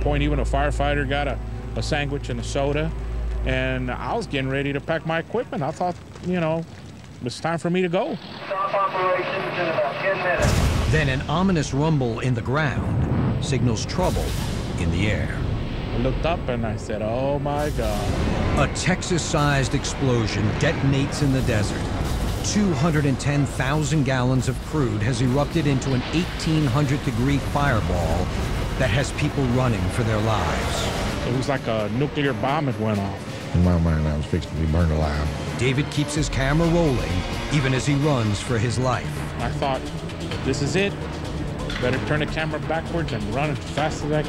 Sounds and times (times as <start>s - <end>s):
Music: 0.0s - 5.8s, 8.5s - 44.2s
Speech: 16.0s - 21.8s, 28.8s - 39.8s.